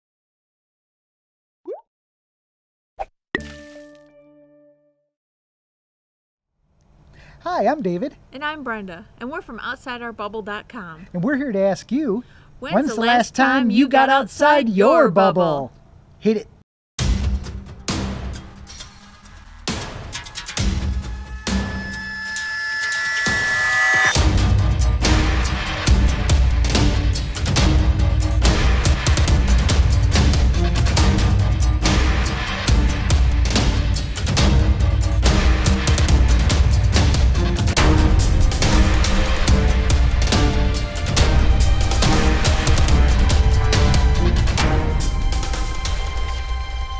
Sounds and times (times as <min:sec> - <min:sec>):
Plop: 0:01.7 - 0:01.9
Music: 0:03.4 - 0:05.1, 0:17.0 - 0:46.9
Speech: 0:07.4 - 0:16.5.